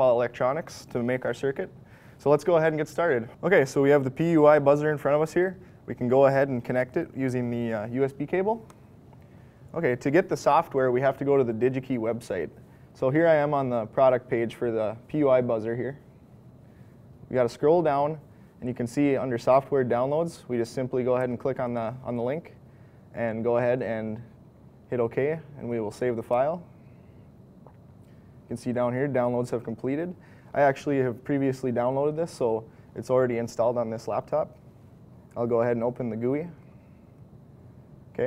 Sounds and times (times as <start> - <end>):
Speech: 0.0 - 8.7, 9.7 - 16.1, 17.3 - 22.6, 23.2 - 26.7, 28.5 - 34.6, 35.3 - 36.6.